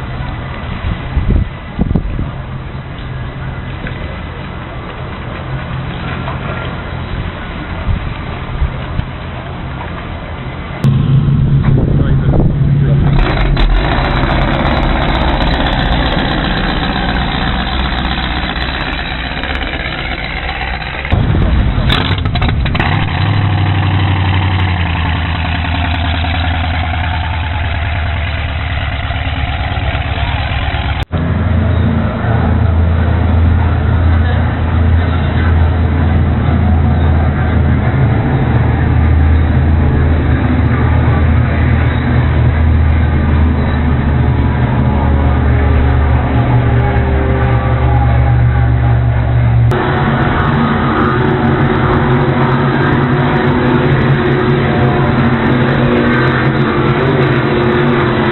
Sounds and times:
Motorboat, speedboat: 0.0s - 58.3s
Speech: 11.7s - 13.2s, 33.4s - 37.7s.

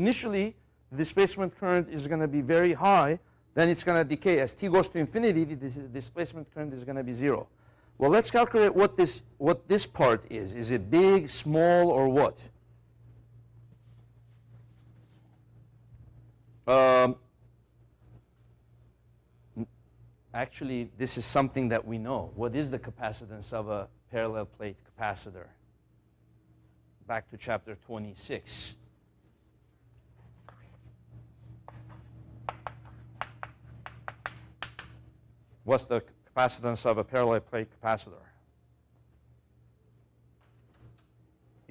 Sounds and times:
Speech: 0.0s - 12.5s, 16.7s - 17.2s, 20.3s - 25.6s, 27.0s - 28.8s, 35.6s - 38.4s.

